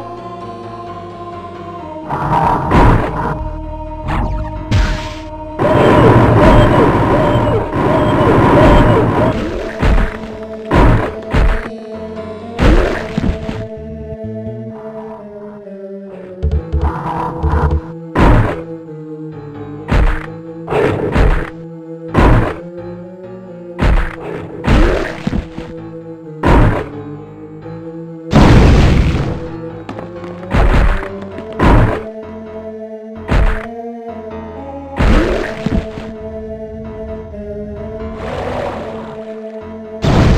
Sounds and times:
Smash, crash: 0:04.7 - 0:11.7, 0:28.3 - 0:29.5, 0:40.0 - 0:40.3.

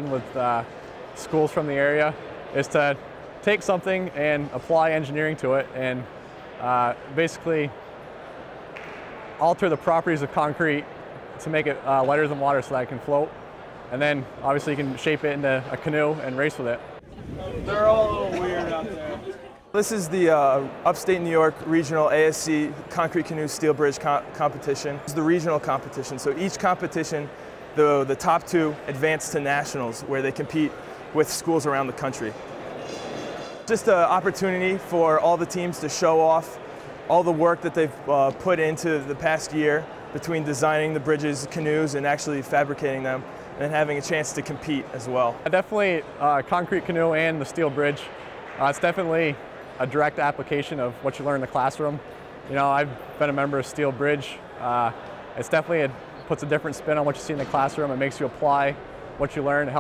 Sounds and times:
Speech: 0:00.0 - 0:07.8, 0:09.4 - 0:10.8, 0:11.4 - 0:13.3, 0:13.9 - 0:32.4, 0:33.7 - 0:59.8.

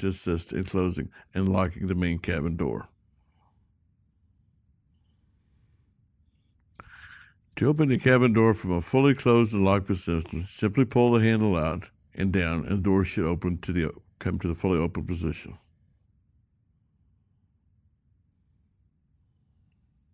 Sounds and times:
Speech: 0:00.0 - 0:03.0, 0:07.6 - 0:15.7.

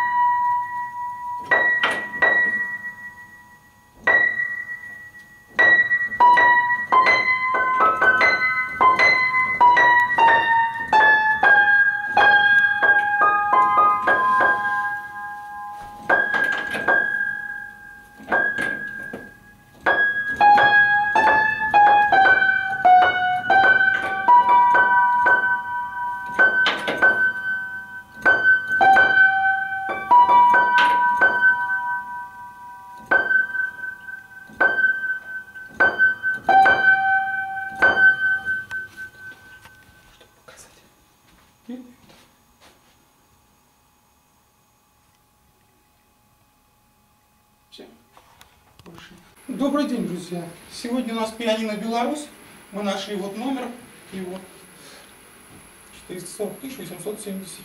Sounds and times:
Music: 0:00.0 - 0:19.4, 0:20.0 - 0:39.6.

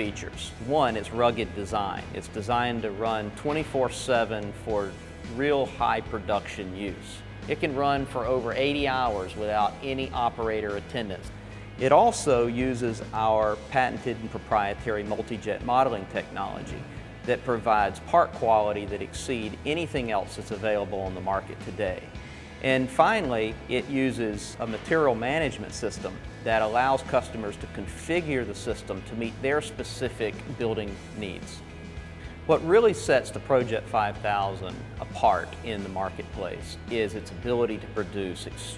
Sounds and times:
Speech: 0:00.0 - 0:31.6, 0:32.5 - 0:38.7
Music: 0:00.0 - 0:38.7.

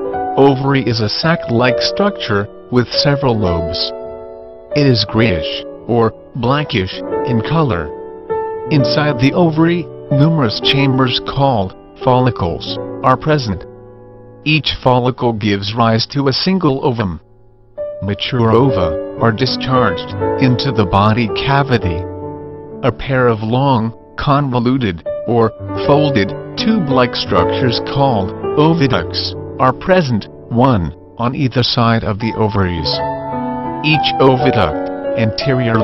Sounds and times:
Music: 0:00.0 - 0:35.8
Speech: 0:00.4 - 0:04.0, 0:04.8 - 0:07.9, 0:08.7 - 0:13.7, 0:14.4 - 0:17.2, 0:18.0 - 0:22.0, 0:22.8 - 0:33.0, 0:33.8 - 0:35.8.

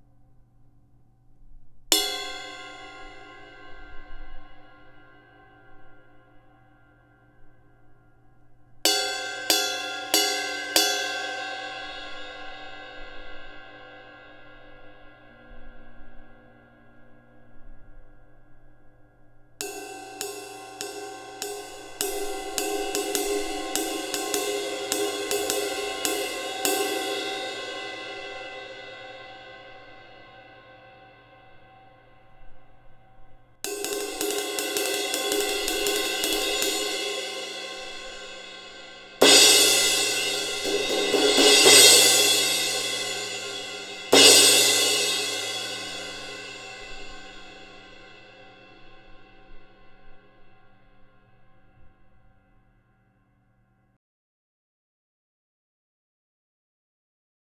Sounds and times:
Reverberation: 0:00.0 - 0:53.9
Music: 0:00.0 - 0:54.0.

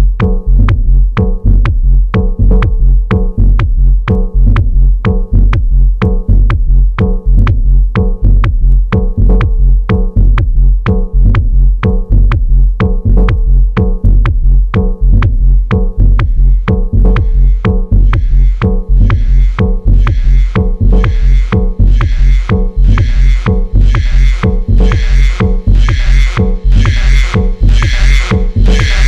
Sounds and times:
Hip hop music: 0:14.8 - 0:29.0
Sampler: 0:15.1 - 0:29.0.

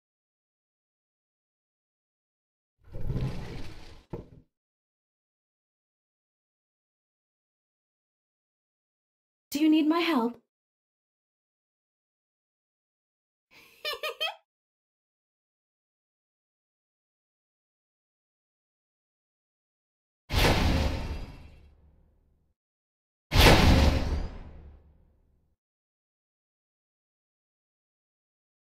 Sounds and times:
Speech: 0:09.5 - 0:10.4.

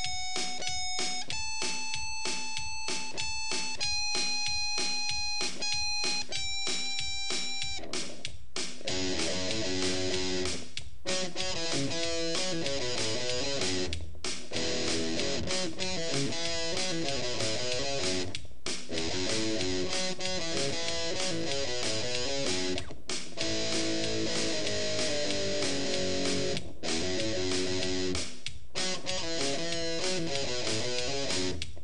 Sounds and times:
Bass guitar: 0:07.8 - 0:31.8
Electric guitar: 0:08.8 - 0:18.3, 0:18.9 - 0:28.2, 0:28.8 - 0:31.7
Strum: 0:08.8 - 0:31.6.

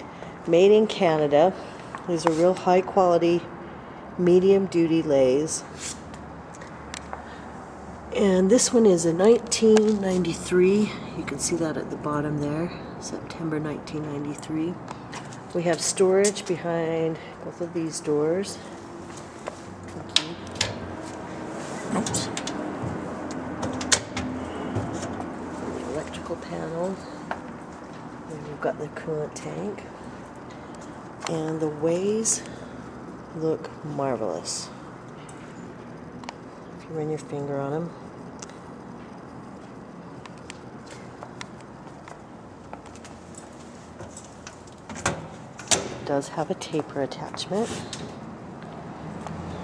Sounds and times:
Speech: 0:00.5 - 0:03.5, 0:08.1 - 0:14.8, 0:15.5 - 0:18.6, 0:21.8 - 0:22.4, 0:25.8 - 0:27.1, 0:28.3 - 0:29.9, 0:31.3 - 0:32.5, 0:33.4 - 0:34.8, 0:36.8 - 0:38.0, 0:46.1 - 0:47.9.

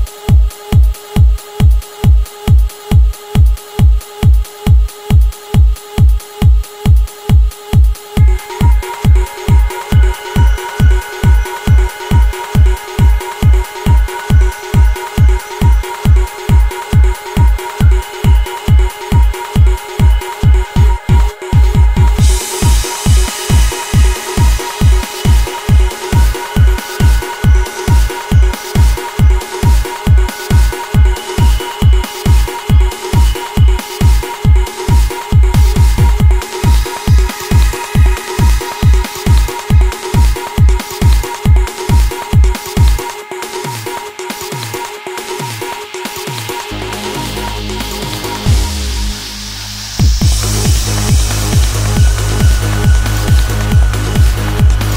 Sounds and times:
Trance music: 0:00.0 - 0:54.9.

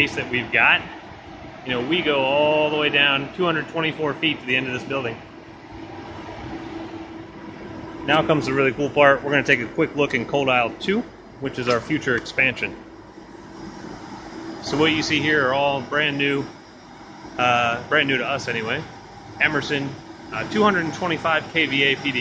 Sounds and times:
Speech: 0:00.0 - 0:01.0, 0:01.7 - 0:05.2, 0:08.1 - 0:12.8, 0:14.6 - 0:16.5, 0:17.4 - 0:22.2.

